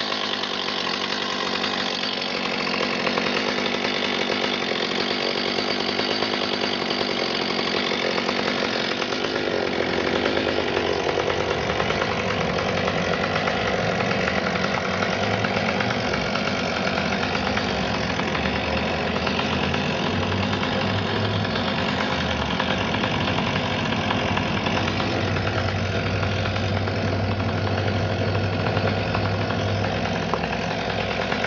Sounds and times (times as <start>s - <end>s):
Engine knocking: 0.0s - 31.4s.